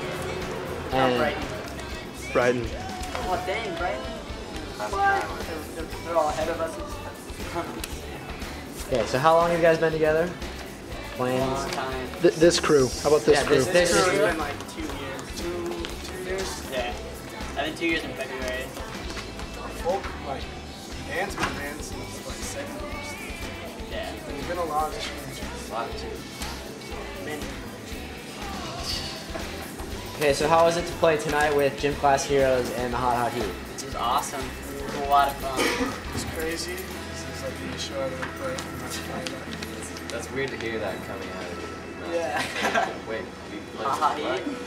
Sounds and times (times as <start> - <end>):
Music: 0.0 - 44.6.